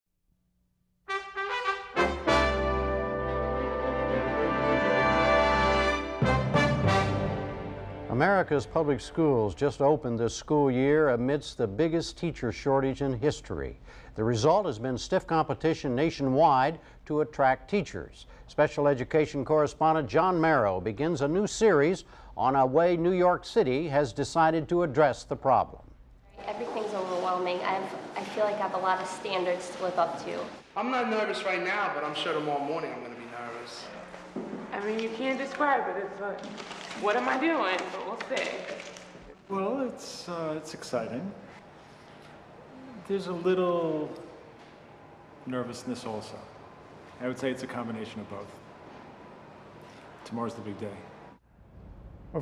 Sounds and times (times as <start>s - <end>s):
Trombone: 1.1s - 9.1s
Speech: 8.1s - 25.8s, 45.5s - 46.5s, 47.2s - 48.6s.